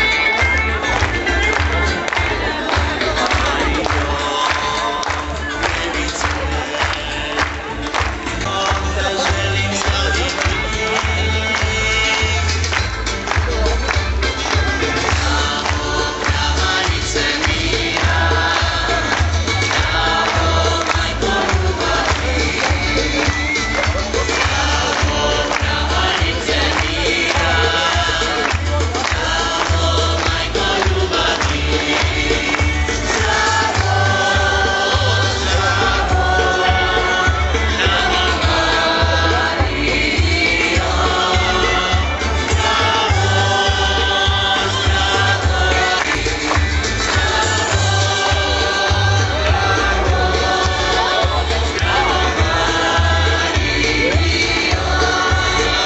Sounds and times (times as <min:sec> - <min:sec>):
Music: 0:00.0 - 0:55.8
Male singing: 0:03.2 - 0:12.7, 0:24.4 - 0:46.4, 0:47.2 - 0:55.8.